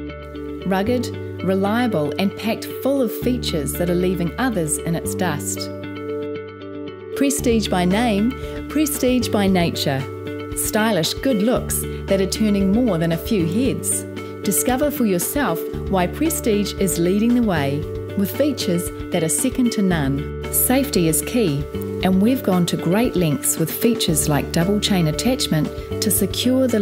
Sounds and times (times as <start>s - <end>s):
Music: 0.0s - 26.8s
Speech: 0.6s - 5.8s, 7.2s - 26.8s.